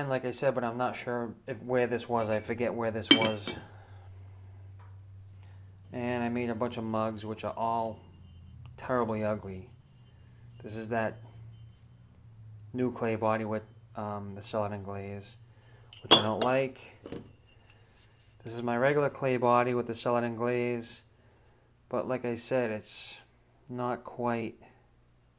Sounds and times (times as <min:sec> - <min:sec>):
Speech: 0:00.0 - 0:03.6, 0:05.9 - 0:08.0, 0:08.8 - 0:09.7, 0:10.6 - 0:11.2, 0:12.8 - 0:15.4, 0:16.1 - 0:17.0, 0:18.4 - 0:21.1, 0:21.9 - 0:24.7
Dishes, pots, and pans: 0:03.1 - 0:03.6, 0:16.0 - 0:17.3.